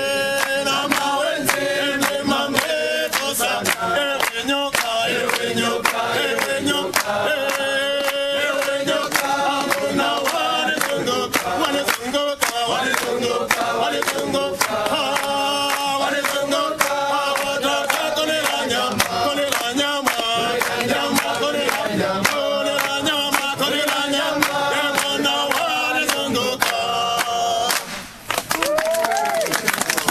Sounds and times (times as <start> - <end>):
Male singing: 0.0 - 27.9
Choir: 0.0 - 28.0.